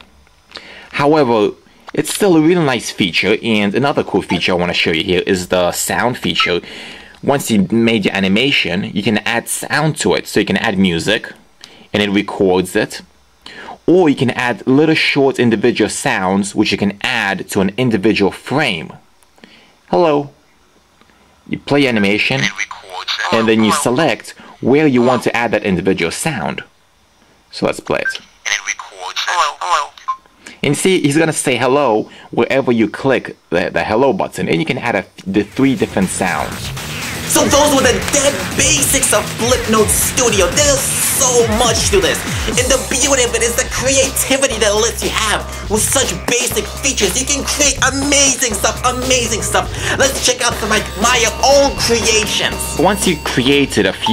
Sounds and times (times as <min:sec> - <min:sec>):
Inside, small room: 0:00.0 - 0:54.1
Speech: 0:00.9 - 0:06.6, 0:07.2 - 0:13.1, 0:13.9 - 0:19.0, 0:19.9 - 0:20.4, 0:21.5 - 0:26.7, 0:27.5 - 0:30.0, 0:30.6 - 0:36.7, 0:37.3 - 0:54.1.